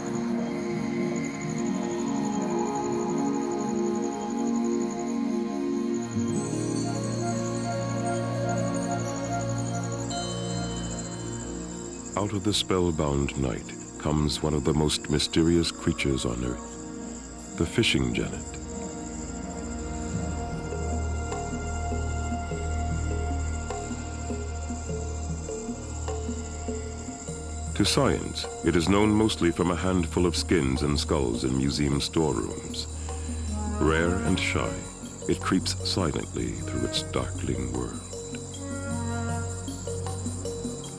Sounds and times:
Speech: 12.2 - 16.6, 17.6 - 18.6, 27.8 - 32.9, 33.8 - 38.0.

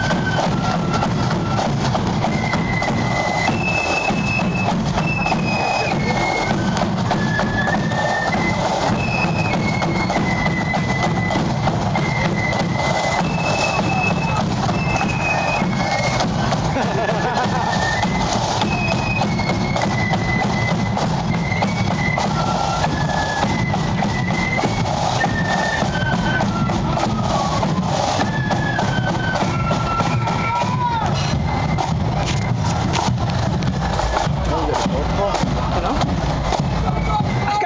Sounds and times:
Music: 0.0 - 37.6
Walk, footsteps: 29.1 - 36.7
Speech: 34.5 - 36.1, 36.8 - 37.6.

